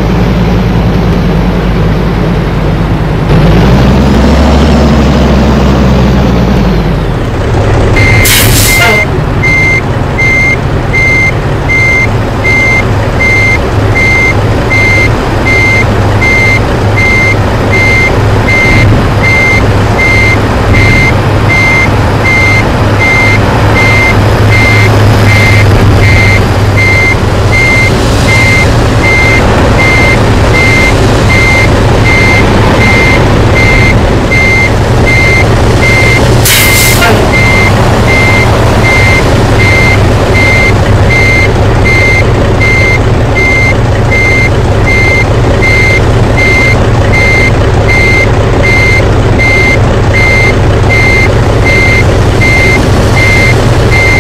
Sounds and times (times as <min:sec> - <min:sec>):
Reversing beeps: 0:08.0 - 0:54.2.